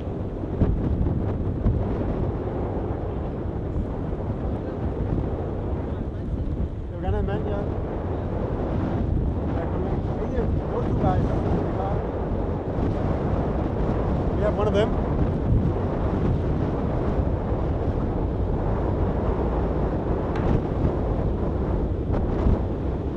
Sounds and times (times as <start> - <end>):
Ship: 0.0 - 23.1
Wind noise (microphone): 0.0 - 23.1.